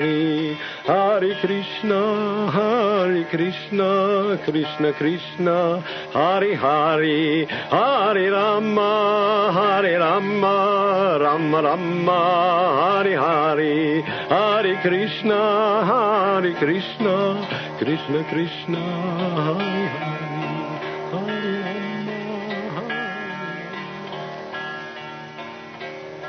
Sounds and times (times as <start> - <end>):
Mantra: 0.0 - 23.4.